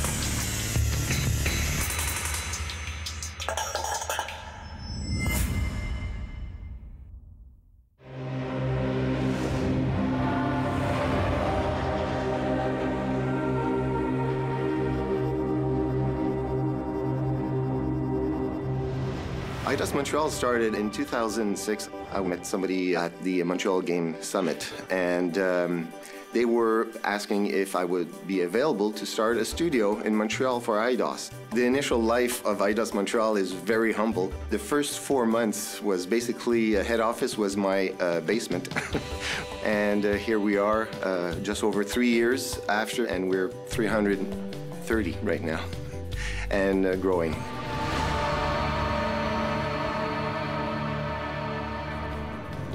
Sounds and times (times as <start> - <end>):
Music: 0.0 - 52.7
Speech: 19.7 - 25.8, 26.4 - 38.7, 39.6 - 44.3, 44.9 - 45.7, 46.5 - 47.4.